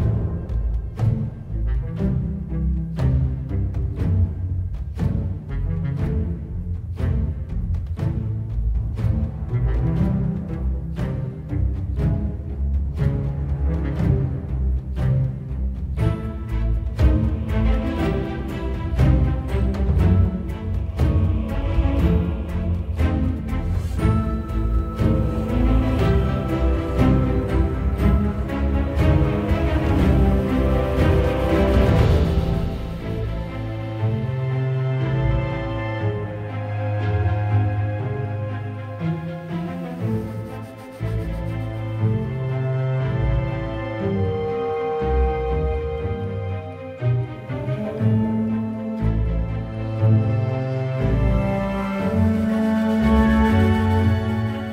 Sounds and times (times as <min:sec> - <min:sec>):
Background music: 0:00.0 - 0:54.7
Soundtrack music: 0:00.0 - 0:54.7.